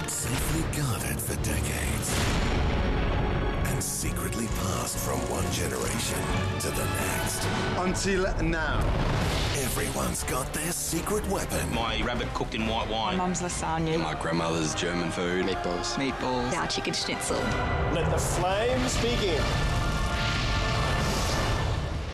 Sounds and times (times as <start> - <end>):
Music: 0.0 - 22.1.